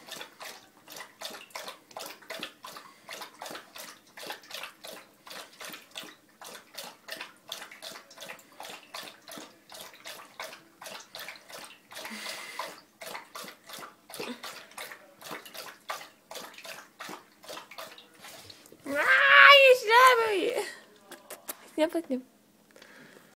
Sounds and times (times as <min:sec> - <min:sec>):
Speech: 0:18.9 - 0:22.3.